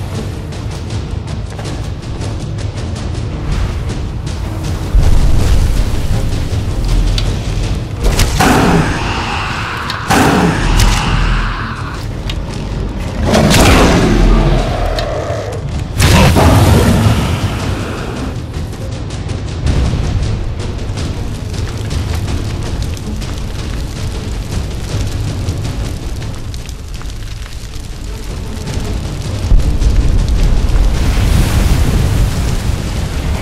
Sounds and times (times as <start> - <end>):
Music: 0.0 - 33.4.